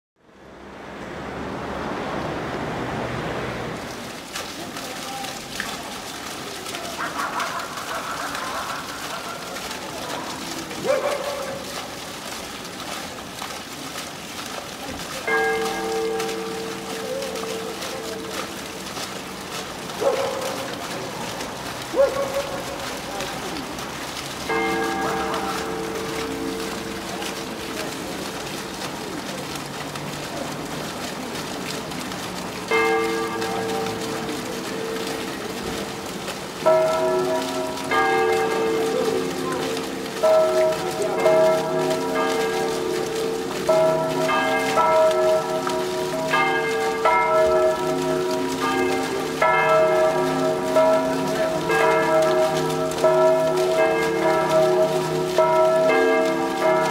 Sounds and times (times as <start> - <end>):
Speech: 4.6 - 7.6, 9.2 - 11.6, 22.1 - 23.8, 38.8 - 39.9.